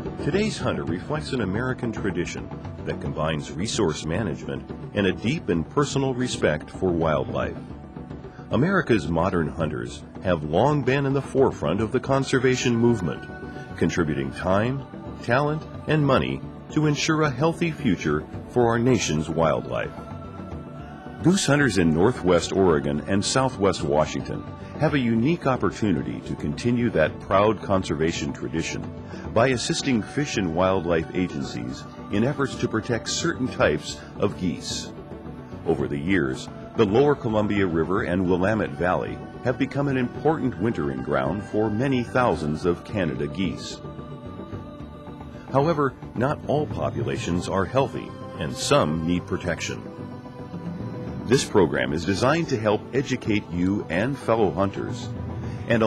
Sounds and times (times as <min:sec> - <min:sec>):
Music: 0:00.0 - 0:55.8
Speech: 0:00.2 - 0:07.6, 0:08.5 - 0:20.0, 0:21.2 - 0:34.9, 0:35.7 - 0:43.8, 0:45.5 - 0:49.9, 0:51.3 - 0:55.1.